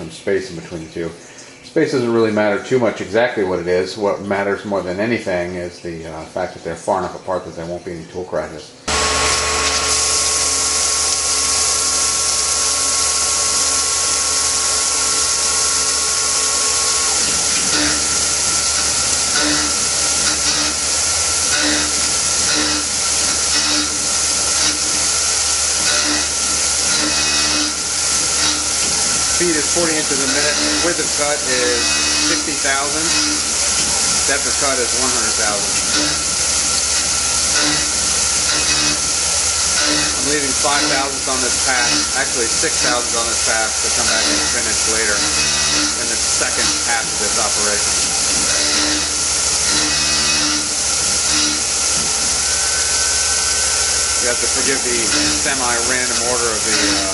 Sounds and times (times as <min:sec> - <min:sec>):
Speech: 0:00.0 - 0:08.8, 0:29.4 - 0:33.2, 0:34.3 - 0:35.8, 0:40.2 - 0:47.9, 0:54.2 - 0:57.1
Drill: 0:08.9 - 0:57.1.